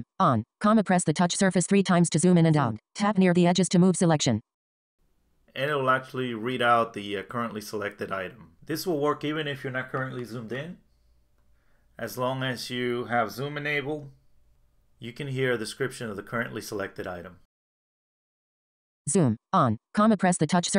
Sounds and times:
Speech: 0.0 - 4.4, 5.6 - 10.8, 12.0 - 14.1, 15.0 - 17.5, 19.1 - 20.7.

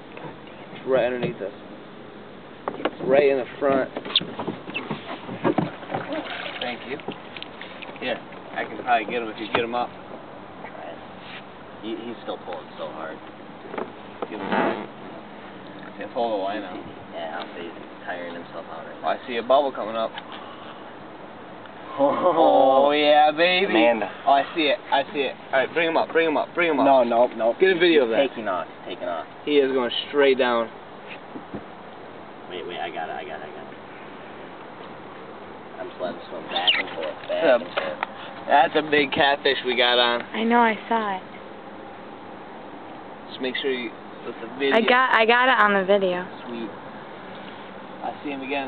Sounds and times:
Outside, rural or natural: 0.0 - 48.6
Vehicle: 0.0 - 48.6.

